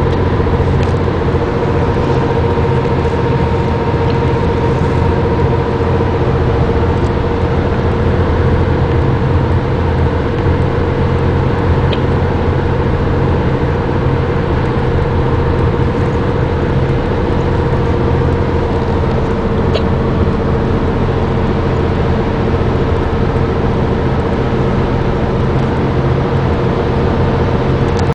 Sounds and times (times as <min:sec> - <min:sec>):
Motor vehicle (road): 0:00.0 - 0:28.1.